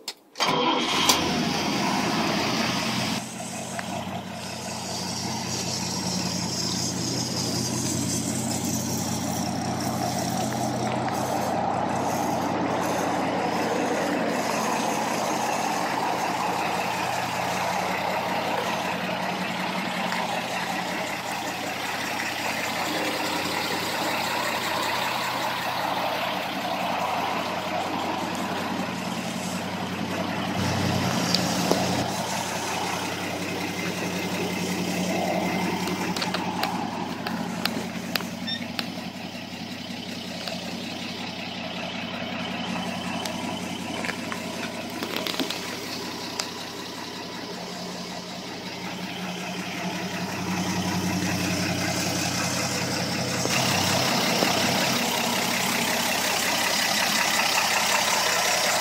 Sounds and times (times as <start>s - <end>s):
Car: 0.0s - 58.8s.